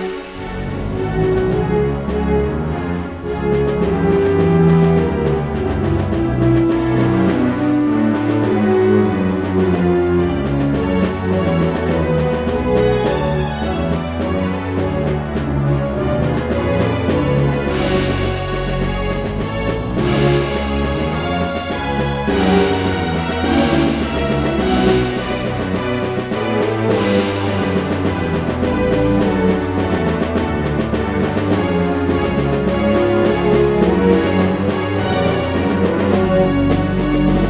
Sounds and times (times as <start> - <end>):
Jazz: 0.0 - 37.5
Soundtrack music: 0.0 - 37.5.